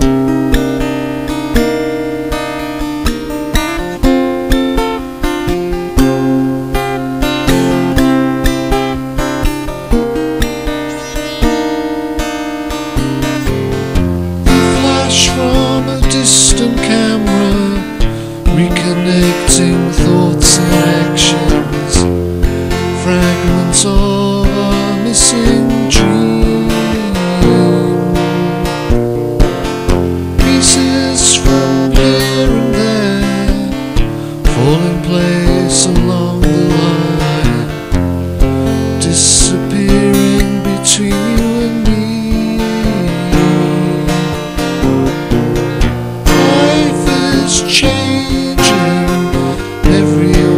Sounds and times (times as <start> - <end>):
Music: 0.0 - 50.5.